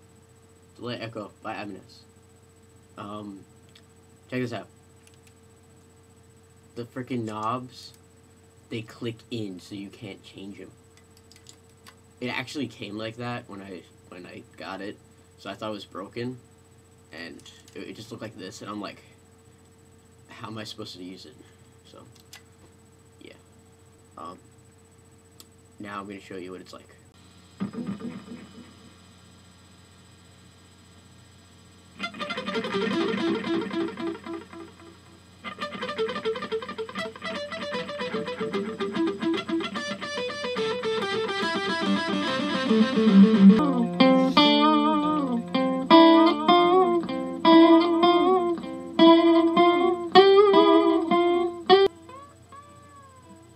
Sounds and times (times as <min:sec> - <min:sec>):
Music: 0:27.6 - 0:28.8, 0:32.0 - 0:53.5.